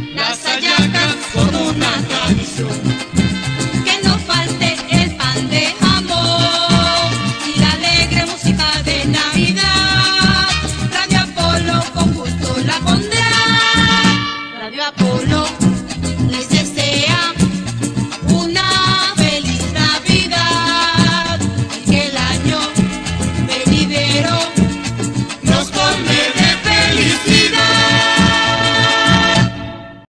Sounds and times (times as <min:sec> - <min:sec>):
Jingle (music): 0:00.0 - 0:30.1.